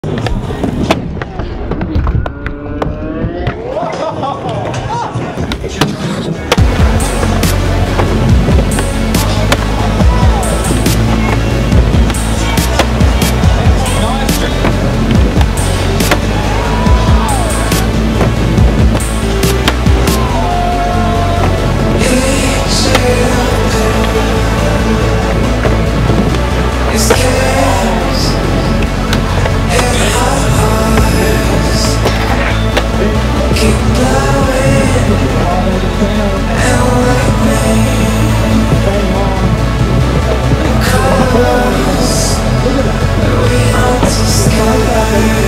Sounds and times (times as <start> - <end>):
Music: 6.3 - 45.4.